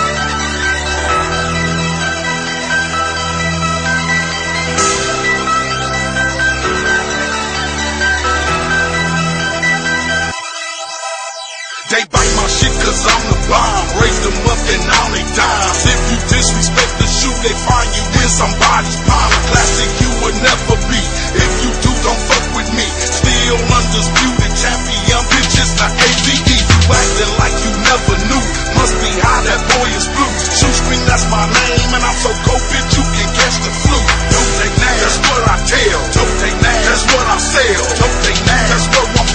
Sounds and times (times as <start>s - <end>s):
Music: 0.0s - 39.3s.